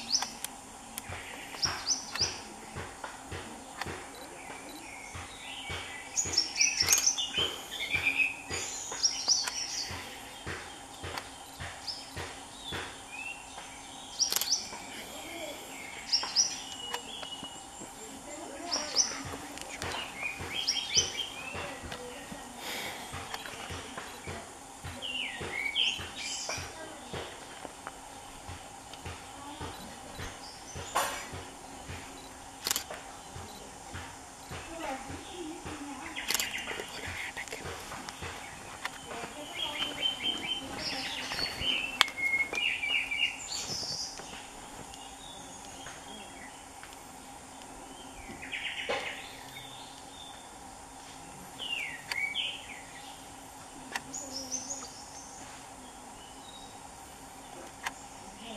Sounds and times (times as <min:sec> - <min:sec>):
Bird: 0:01.0 - 0:02.7, 0:03.6 - 0:18.0, 0:18.6 - 0:24.4, 0:34.5 - 0:46.8, 0:47.9 - 0:50.5.